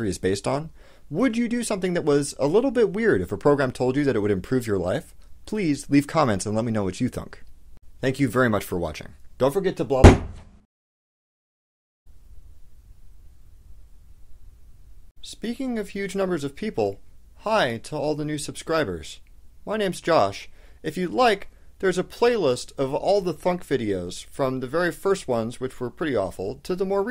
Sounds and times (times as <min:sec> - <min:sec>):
Speech: 0:00.0 - 0:10.2, 0:15.2 - 0:27.1.